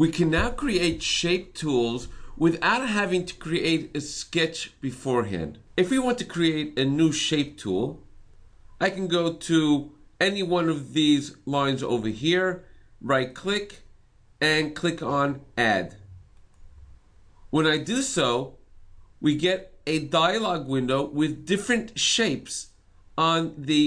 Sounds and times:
Speech: 0:00.0 - 0:08.0, 0:08.8 - 0:13.8, 0:14.4 - 0:16.1, 0:17.5 - 0:18.6, 0:19.2 - 0:23.8.

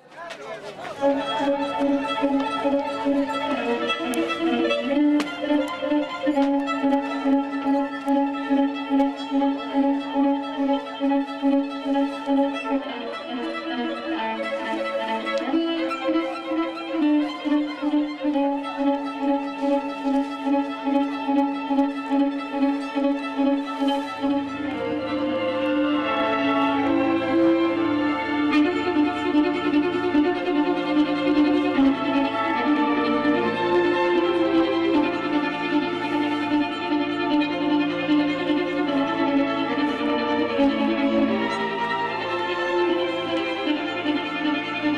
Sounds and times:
Music: 0:01.0 - 0:44.9.

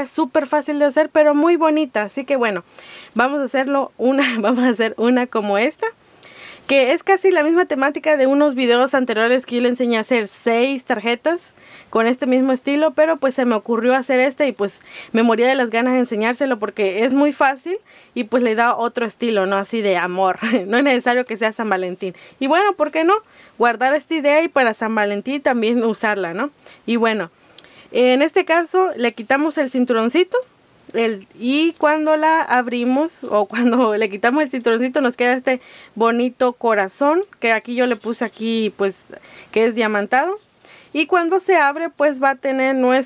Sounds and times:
Speech: 0:00.0 - 0:02.6, 0:03.2 - 0:06.0, 0:06.7 - 0:27.3, 0:27.9 - 0:43.0.

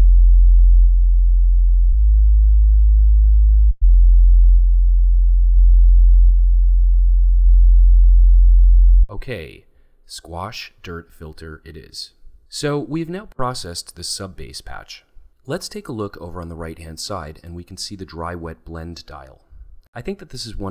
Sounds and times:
Speech: 0:09.1 - 0:20.7.

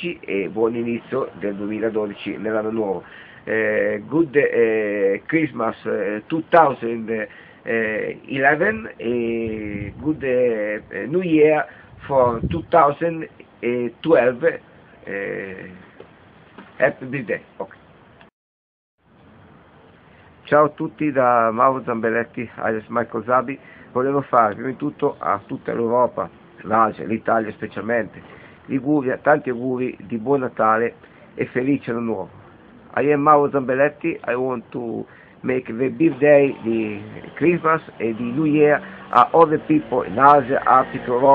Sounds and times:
Speech: 0:00.0 - 0:15.9, 0:16.8 - 0:17.8, 0:20.5 - 0:32.3, 0:32.9 - 0:41.3.

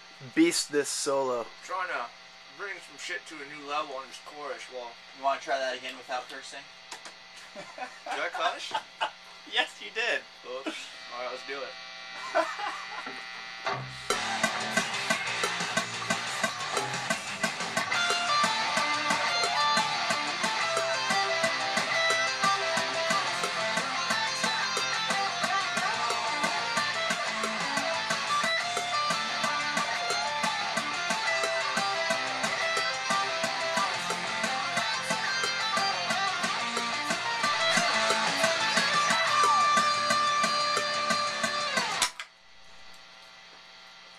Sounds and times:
Electric guitar: 0:10.7 - 0:43.8.

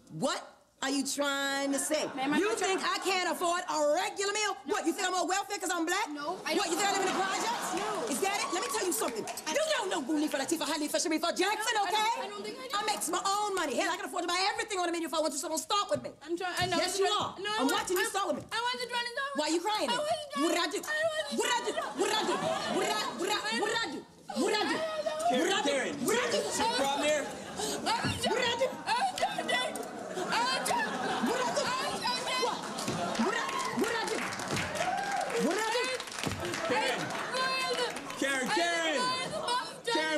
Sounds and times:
Laughter: 0:06.3 - 0:10.4, 0:21.4 - 0:23.5, 0:26.3 - 0:33.9.

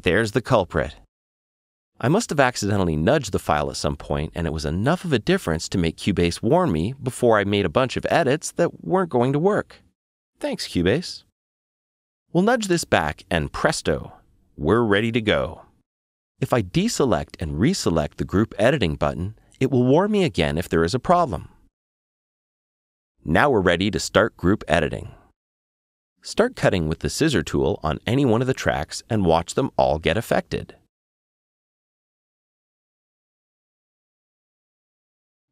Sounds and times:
Speech: 0:00.0 - 0:01.1, 0:02.0 - 0:09.8, 0:10.4 - 0:11.3, 0:12.3 - 0:15.7, 0:16.4 - 0:21.6, 0:23.2 - 0:25.3, 0:26.2 - 0:30.9.

